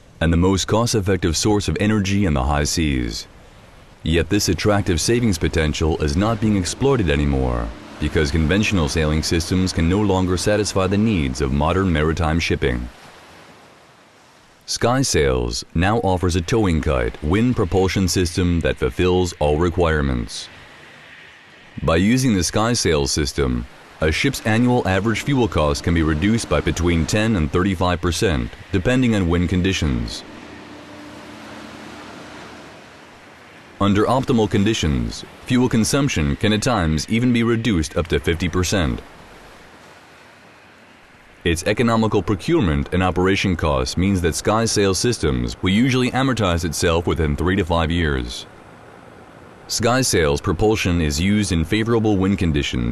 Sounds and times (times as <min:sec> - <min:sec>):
Speech: 0:00.2 - 0:03.3, 0:04.1 - 0:13.0, 0:14.7 - 0:20.6, 0:21.8 - 0:30.3, 0:33.8 - 0:39.0, 0:41.5 - 0:48.5, 0:49.7 - 0:52.9
Rustling leaves: 0:02.8 - 0:14.7, 0:16.3 - 0:42.0.